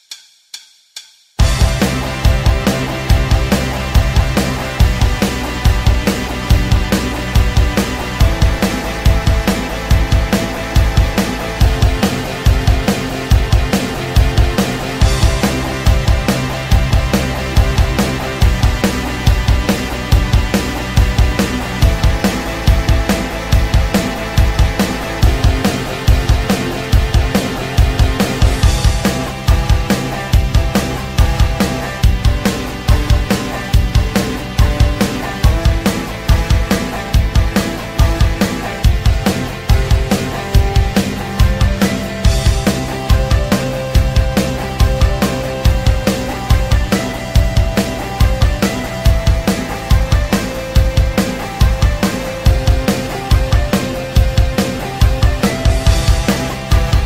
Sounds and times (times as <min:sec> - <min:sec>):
Music: 0:01.4 - 0:57.0.